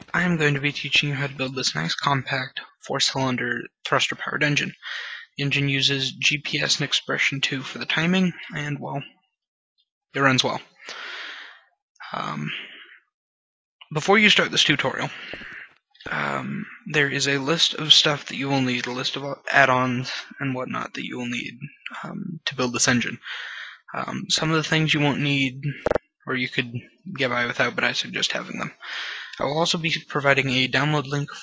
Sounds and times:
Speech: 0.0 - 9.3, 10.1 - 11.4, 12.0 - 12.8, 13.8 - 31.4.

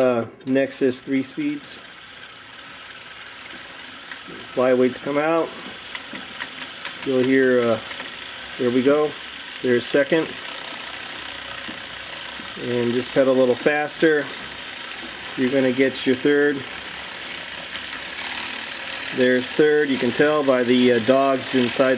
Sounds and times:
Speech: 0.0 - 1.8, 4.5 - 5.5, 7.0 - 7.8, 8.6 - 10.4, 12.6 - 14.3, 15.4 - 16.7, 19.1 - 21.9
Bicycle: 0.5 - 21.9.

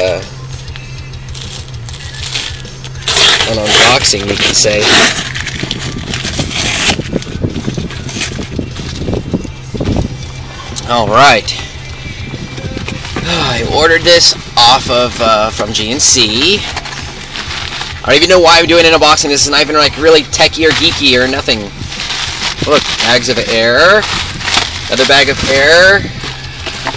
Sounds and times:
Speech: 13.2 - 16.6, 18.1 - 21.7, 22.7 - 24.1, 24.9 - 26.0.

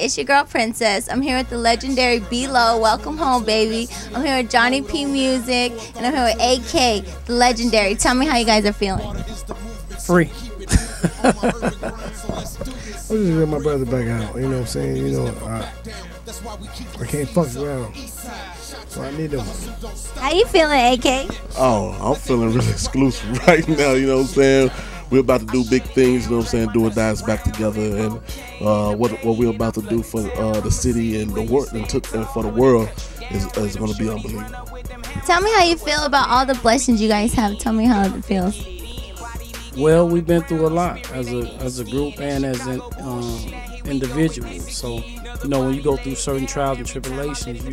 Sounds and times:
Speech: 0.0 - 9.4, 10.0 - 10.4, 11.2 - 15.7, 16.8 - 18.0, 18.9 - 34.5, 35.2 - 38.6, 39.8 - 47.7
Music: 0.0 - 47.7.

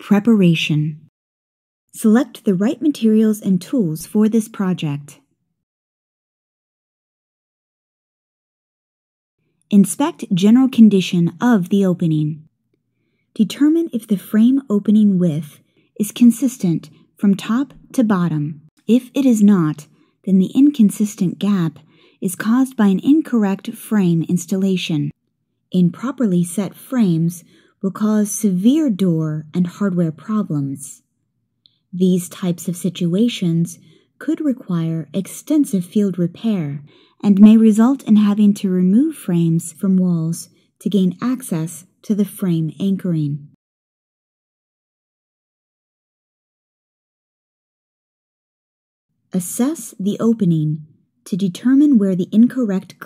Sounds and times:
Speech: 0.0 - 1.1, 2.0 - 5.2, 9.7 - 12.5, 13.4 - 25.2, 25.8 - 31.0, 32.0 - 43.6, 49.4 - 53.0.

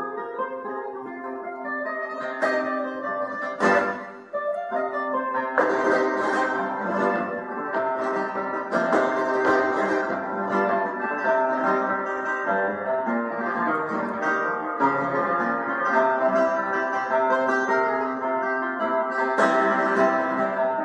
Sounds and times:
Acoustic guitar: 0.0 - 20.8
Flamenco: 0.0 - 20.8.

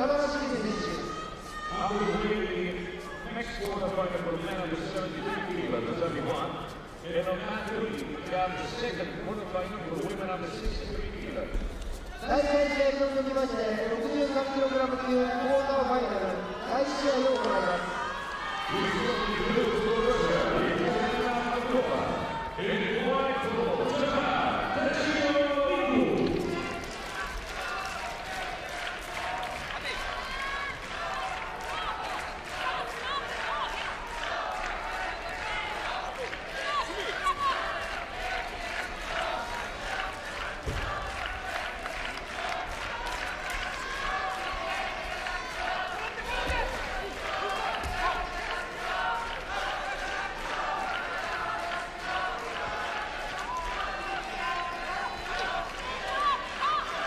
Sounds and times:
Speech: 0.0 - 18.0, 18.7 - 26.8.

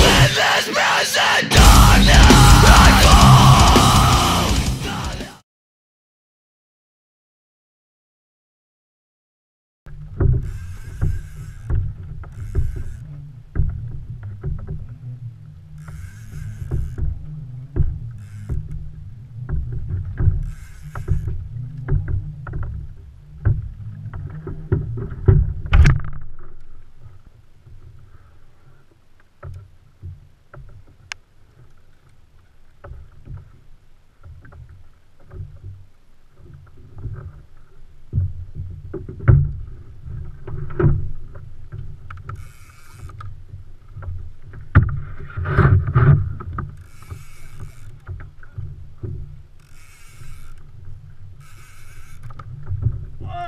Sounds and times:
Rowboat, canoe, kayak: 9.9 - 53.4
Wind: 9.9 - 53.4.

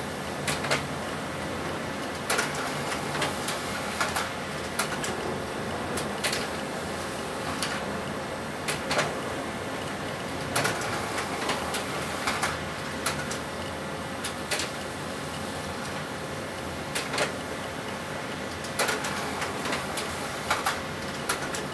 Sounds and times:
Printer: 0.0 - 21.7.

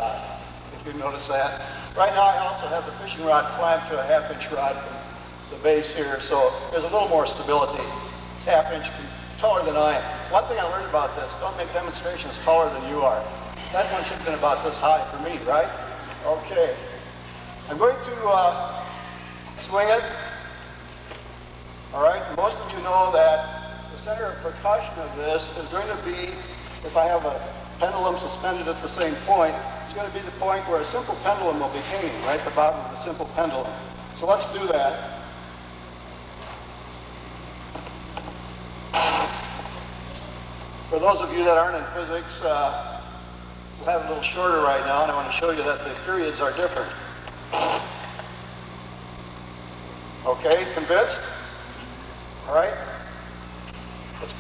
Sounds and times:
Speech: 0.0 - 17.0, 17.7 - 18.9, 21.9 - 35.2, 40.9 - 43.0, 43.8 - 47.0, 50.2 - 51.5.

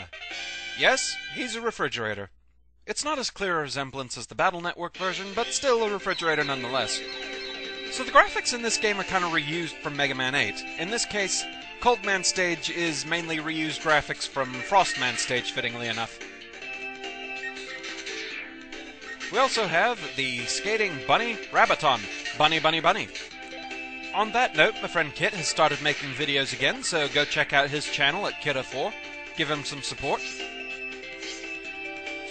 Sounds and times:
Music: 0.0 - 1.7, 5.0 - 32.3
Speech: 0.8 - 2.3, 2.9 - 7.0, 8.0 - 16.2, 19.3 - 23.1, 24.2 - 30.4.

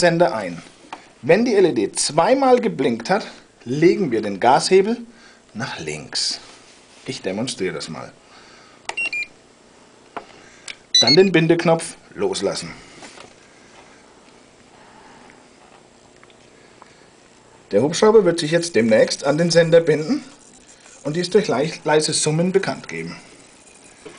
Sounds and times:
Speech: 0.0 - 8.2, 11.0 - 12.8, 17.7 - 20.4, 21.0 - 23.3.

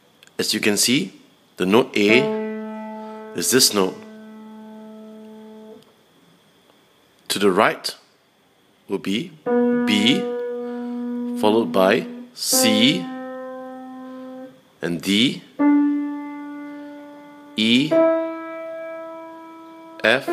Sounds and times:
Speech: 0.4 - 2.3, 3.4 - 4.0, 7.3 - 8.0, 8.9 - 10.3, 11.4 - 13.1, 14.8 - 15.5, 17.6 - 18.0, 20.0 - 20.3.

